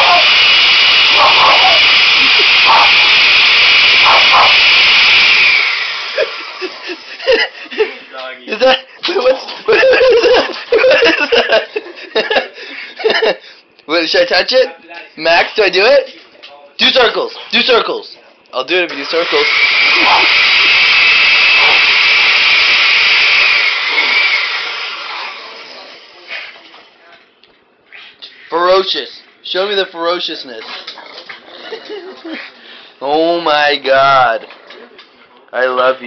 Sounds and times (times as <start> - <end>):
Speech: 13.9 - 19.5, 28.5 - 30.9, 33.0 - 34.5, 35.2 - 36.0.